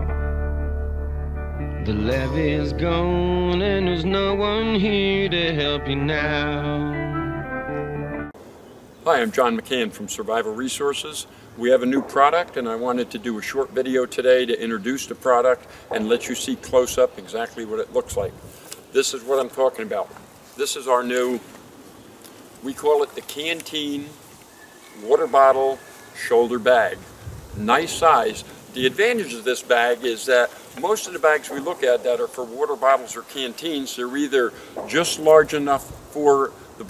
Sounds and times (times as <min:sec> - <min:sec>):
Speech: 0:09.0 - 0:18.4, 0:19.0 - 0:21.5, 0:22.6 - 0:24.2, 0:25.0 - 0:27.0, 0:27.6 - 0:36.8.